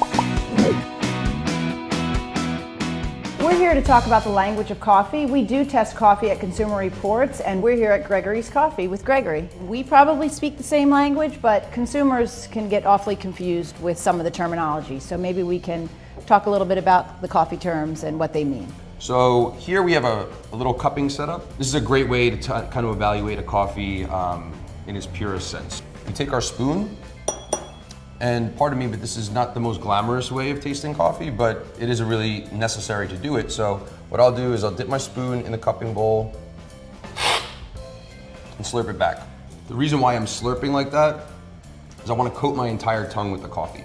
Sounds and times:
Music: 0.0s - 43.8s.

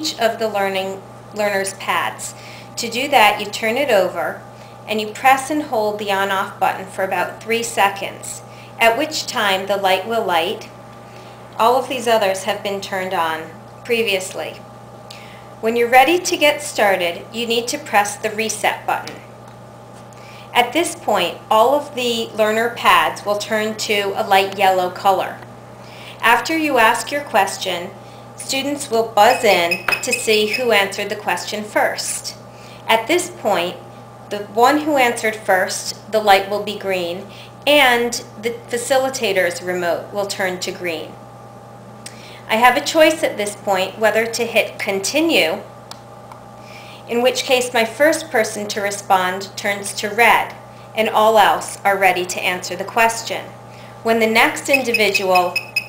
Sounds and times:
Female speech, woman speaking: 0.0s - 10.7s, 11.6s - 14.6s, 15.6s - 19.2s, 20.6s - 25.4s, 26.2s - 41.2s, 42.5s - 45.7s, 47.1s - 53.5s, 54.1s - 55.6s.

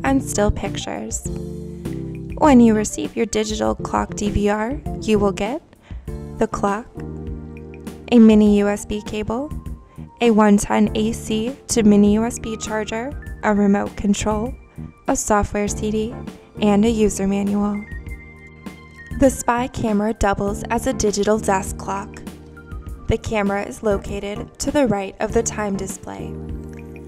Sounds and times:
Speech: 0.0s - 1.3s, 2.4s - 5.6s, 6.4s - 6.9s, 8.1s - 9.5s, 10.2s - 17.9s, 19.2s - 22.2s, 23.1s - 26.4s
Music: 0.0s - 27.0s.

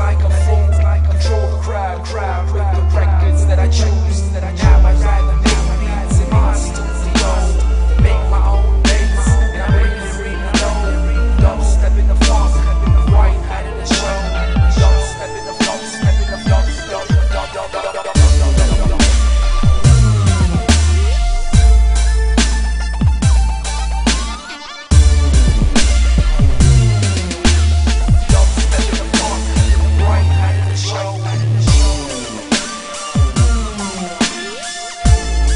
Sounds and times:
Dubstep: 0.0s - 35.5s.

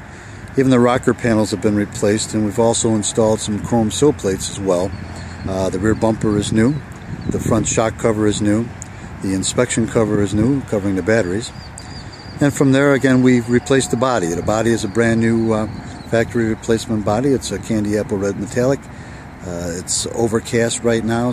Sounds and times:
Outside, rural or natural: 0.0s - 21.3s
Speech: 0.6s - 11.5s, 12.4s - 21.3s.

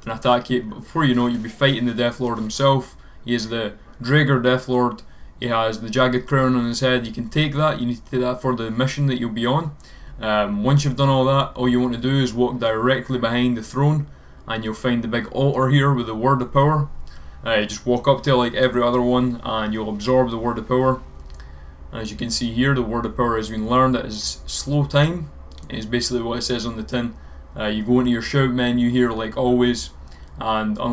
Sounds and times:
Speech: 0.0s - 21.1s, 21.9s - 30.9s.

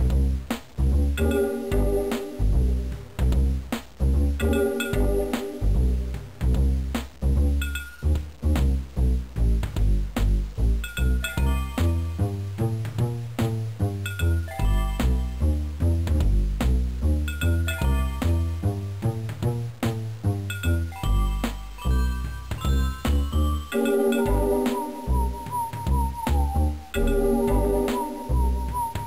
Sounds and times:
Music: 0.0s - 29.0s.

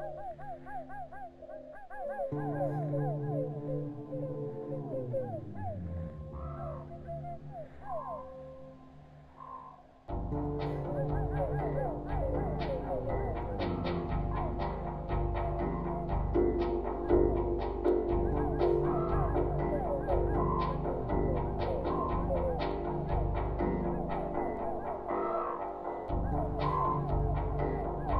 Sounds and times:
Music: 0.0s - 28.1s.

